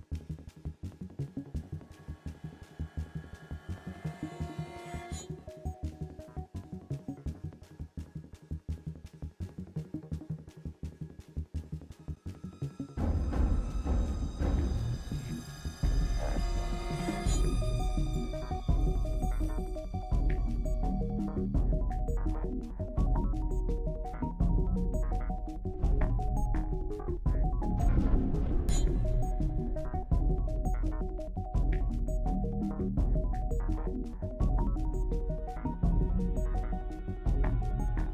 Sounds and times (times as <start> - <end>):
Tender music: 0.0 - 38.1.